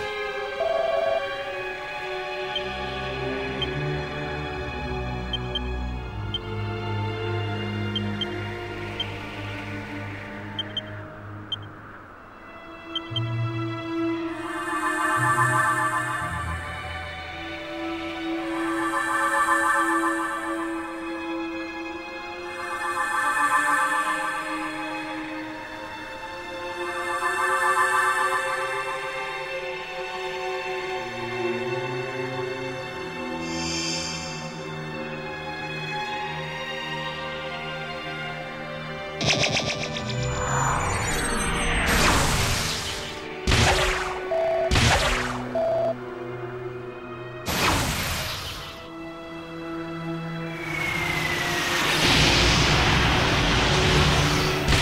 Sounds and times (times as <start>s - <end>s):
Music: 0.0s - 54.8s.